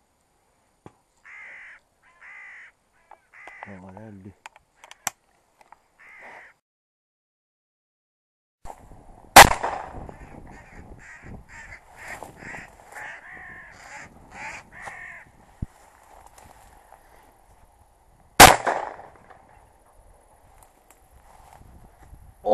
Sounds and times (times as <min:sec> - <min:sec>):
Caw: 0:01.2 - 0:03.9, 0:06.0 - 0:06.6, 0:10.1 - 0:15.3.